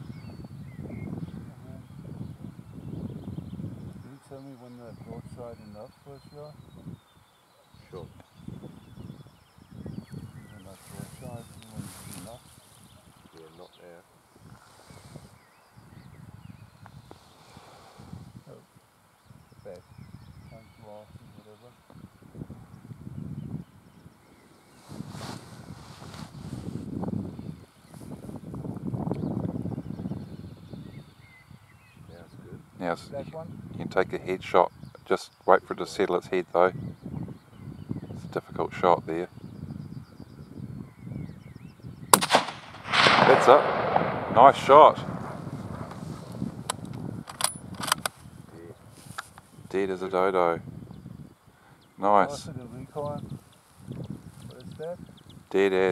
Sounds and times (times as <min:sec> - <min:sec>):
Speech: 0:04.0 - 0:06.6, 0:07.8 - 0:08.2, 0:10.5 - 0:12.4, 0:13.3 - 0:14.0, 0:20.5 - 0:21.8, 0:32.1 - 0:36.8, 0:38.2 - 0:39.3, 0:43.2 - 0:43.7, 0:44.3 - 0:45.1, 0:48.5 - 0:48.8, 0:49.7 - 0:50.6, 0:52.0 - 0:53.3, 0:54.4 - 0:55.9.